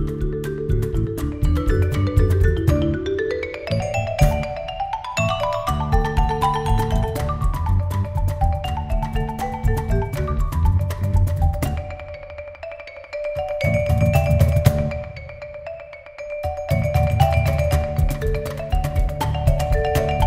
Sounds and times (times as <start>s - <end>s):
Marimba, xylophone: 0.0s - 20.2s.